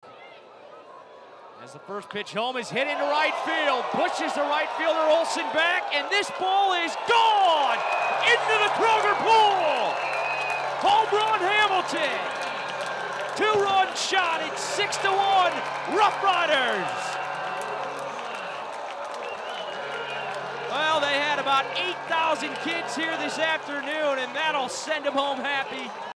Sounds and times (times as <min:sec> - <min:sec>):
Speech: 0:01.6 - 0:09.9, 0:10.8 - 0:12.3, 0:13.4 - 0:17.1, 0:20.7 - 0:25.9.